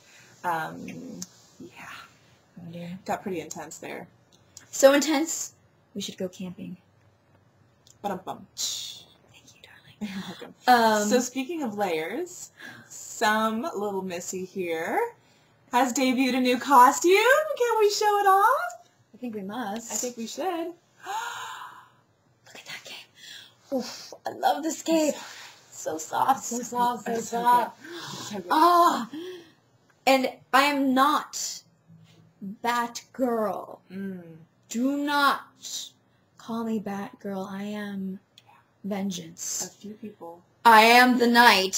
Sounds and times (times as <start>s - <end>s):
Speech: 0.4s - 6.9s, 8.0s - 21.2s, 23.7s - 29.2s, 30.0s - 31.7s, 32.4s - 41.7s.